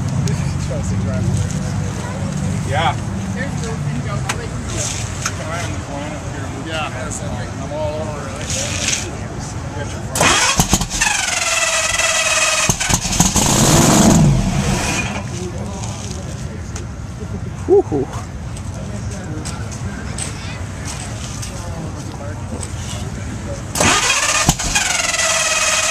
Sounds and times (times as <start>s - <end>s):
Car: 0.0s - 25.9s
Outside, urban or manmade: 0.0s - 25.9s
Speech: 0.2s - 10.2s, 15.2s - 23.8s.